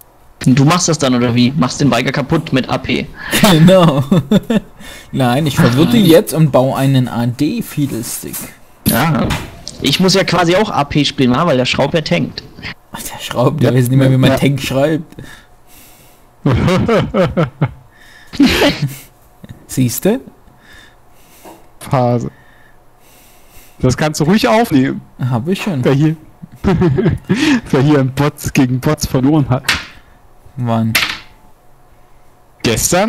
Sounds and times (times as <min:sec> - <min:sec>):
Speech: 0:00.4 - 0:04.0, 0:05.1 - 0:15.1, 0:19.7 - 0:20.4, 0:21.8 - 0:22.3, 0:23.8 - 0:26.2, 0:27.6 - 0:29.7, 0:30.6 - 0:31.0, 0:32.6 - 0:33.0.